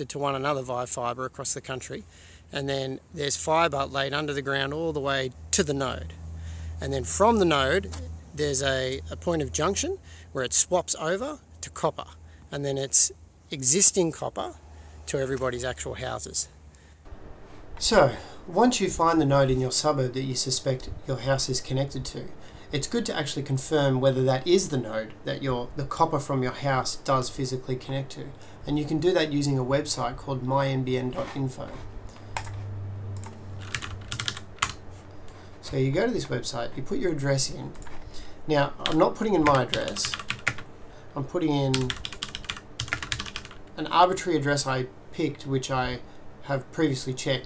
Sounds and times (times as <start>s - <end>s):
Computer keyboard: 32.4s - 32.6s, 33.2s - 34.8s, 38.8s - 40.6s, 41.7s - 43.6s.